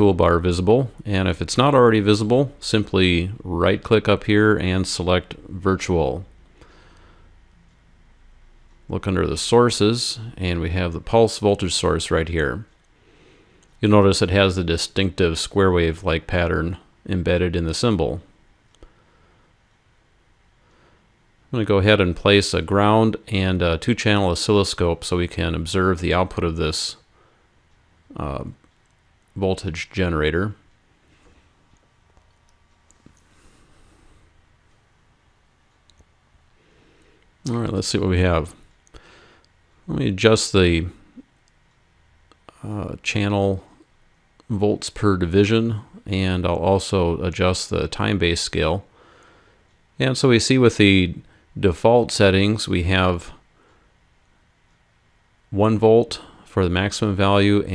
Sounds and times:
Speech: 0.0s - 6.4s, 8.8s - 12.7s, 13.8s - 18.3s, 21.5s - 27.1s, 28.1s - 28.7s, 29.3s - 30.6s, 37.4s - 38.7s, 39.8s - 41.3s, 42.3s - 43.8s, 44.4s - 48.9s, 50.0s - 53.4s, 55.5s - 57.7s
Clicking: 31.7s - 33.3s, 35.7s - 36.1s.

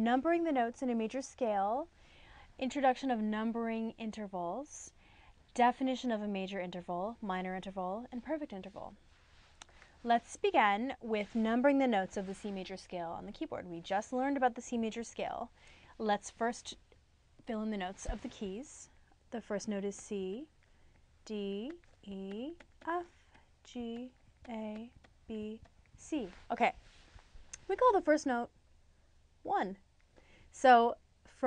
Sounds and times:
Speech: 0.0s - 1.9s, 2.6s - 5.0s, 5.6s - 9.0s, 10.0s - 16.8s, 17.4s - 20.5s, 21.2s - 26.8s, 27.6s - 28.5s, 29.5s - 29.8s, 30.6s - 31.4s.

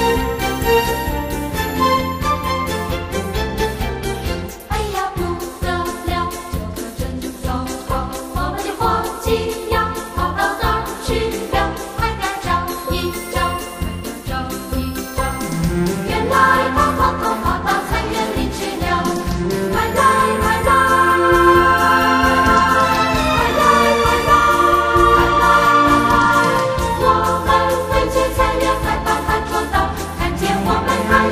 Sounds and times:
Jingle bell: 0.0s - 31.3s.

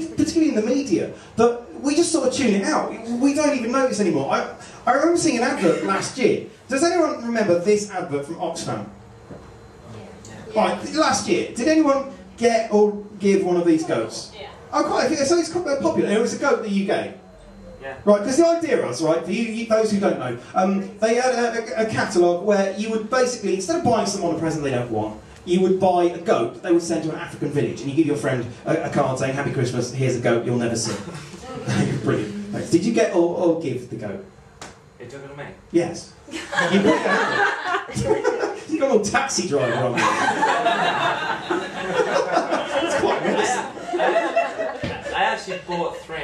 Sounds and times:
Speech: 0.0s - 8.9s, 17.8s - 34.3s, 35.0s - 36.2s, 38.0s - 40.0s, 44.9s - 46.2s.

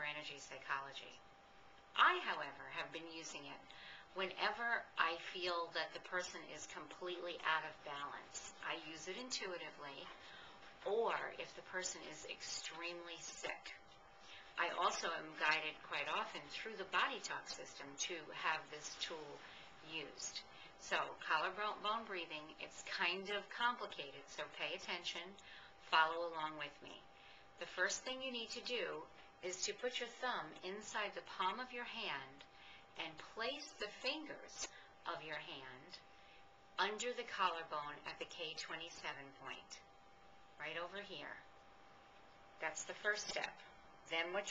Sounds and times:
Speech: 0.0s - 1.2s, 2.0s - 10.2s, 10.8s - 13.8s, 14.6s - 32.4s, 33.0s - 36.0s, 36.8s - 39.8s, 40.6s - 41.5s, 42.6s - 44.5s.

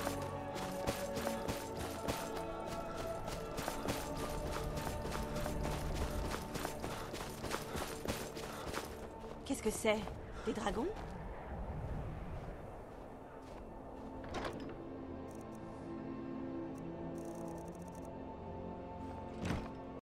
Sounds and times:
Music: 0.0s - 10.1s, 13.6s - 20.0s.

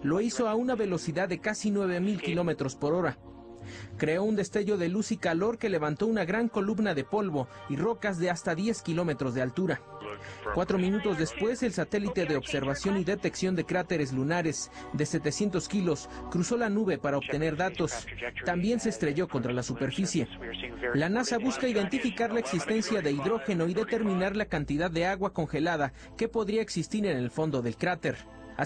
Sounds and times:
Speech: 0.0s - 3.2s, 4.0s - 28.6s
Music: 0.0s - 28.6s.

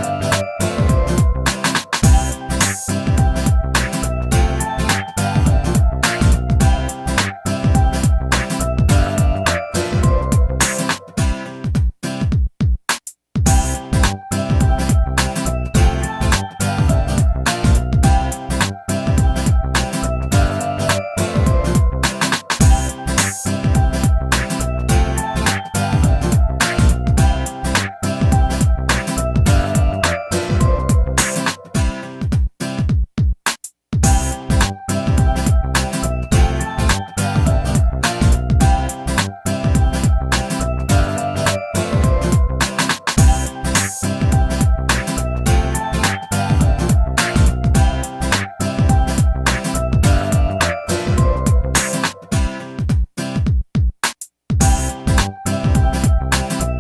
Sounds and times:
Video game music: 0.0s - 11.4s, 13.5s - 32.0s, 34.0s - 52.6s, 54.6s - 56.8s
Pop music: 0.0s - 11.7s, 13.5s - 32.3s, 34.0s - 52.9s, 54.6s - 56.8s.

